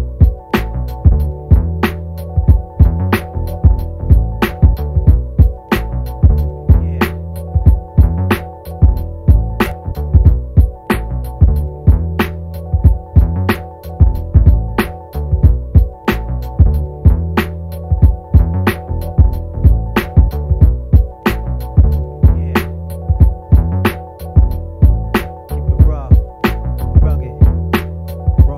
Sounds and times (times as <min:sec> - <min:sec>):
Music: 0:00.0 - 0:28.5.